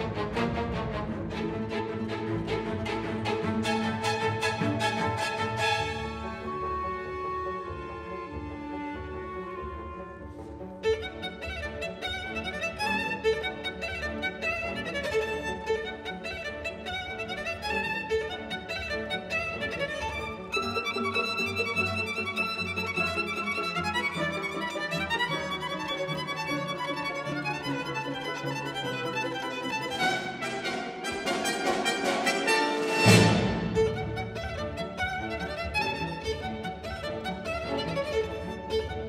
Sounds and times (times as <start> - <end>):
Violin, fiddle: 0.0 - 39.0.